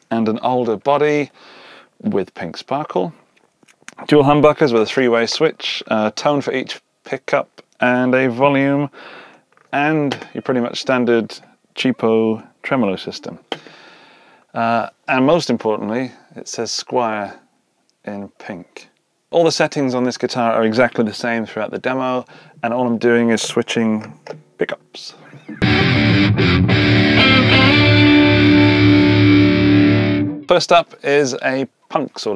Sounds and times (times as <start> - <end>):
Speech: 0.0 - 1.4, 2.0 - 3.2, 4.0 - 9.0, 9.7 - 13.5, 14.6 - 17.4, 18.0 - 25.3, 30.5 - 32.3.